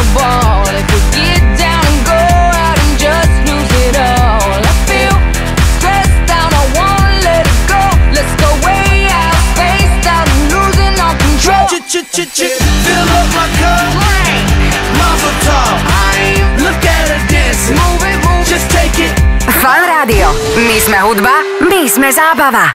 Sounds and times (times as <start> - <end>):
Music: 0.0 - 22.7
Speech: 19.5 - 22.7.